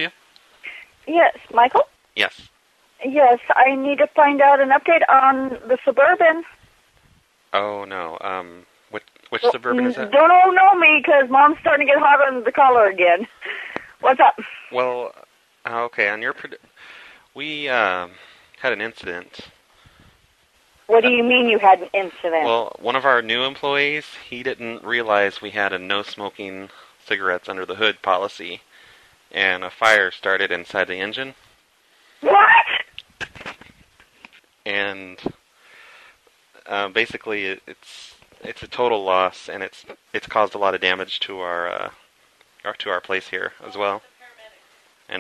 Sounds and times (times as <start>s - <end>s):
Speech: 0.7s - 6.5s, 7.6s - 16.6s, 17.4s - 19.5s, 20.9s - 28.6s, 29.4s - 31.4s, 32.2s - 33.6s, 34.7s - 35.4s, 36.6s - 42.0s, 42.7s - 45.2s.